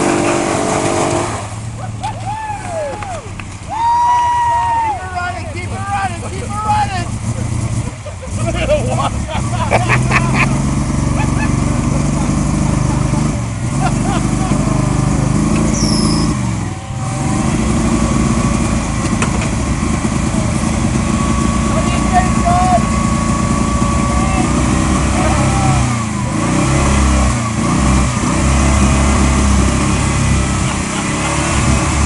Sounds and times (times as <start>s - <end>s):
Speech: 4.9s - 7.1s, 21.7s - 22.8s.